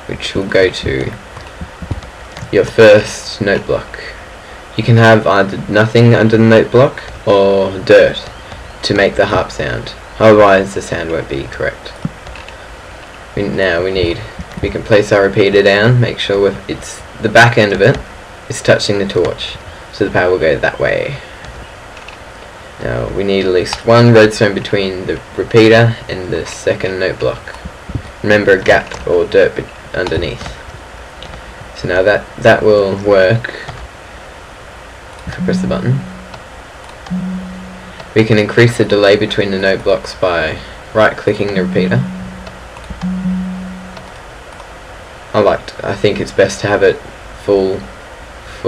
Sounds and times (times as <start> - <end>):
Speech: 0.0 - 1.2, 2.5 - 12.1, 13.4 - 21.4, 22.8 - 30.6, 31.8 - 33.8, 35.3 - 36.2, 38.1 - 42.5, 45.3 - 48.6.